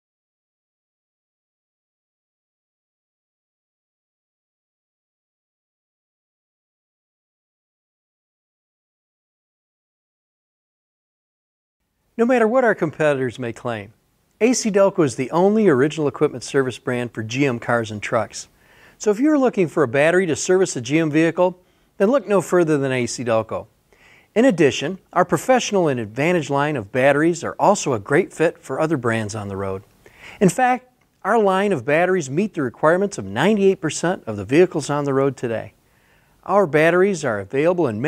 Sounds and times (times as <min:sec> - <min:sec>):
Speech: 0:12.2 - 0:23.7, 0:24.4 - 0:35.8, 0:36.4 - 0:38.0.